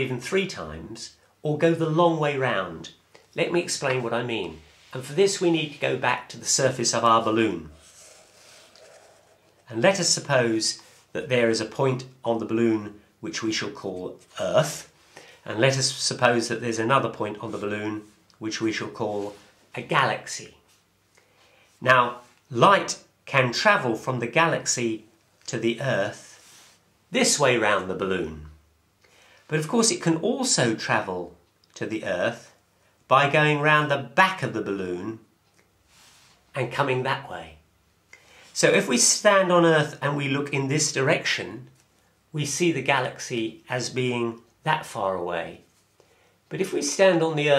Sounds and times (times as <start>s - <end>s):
Speech: 0.0s - 7.8s, 9.6s - 20.6s, 21.8s - 26.4s, 27.1s - 28.6s, 29.5s - 35.3s, 36.5s - 37.6s, 38.5s - 45.7s, 46.5s - 47.5s.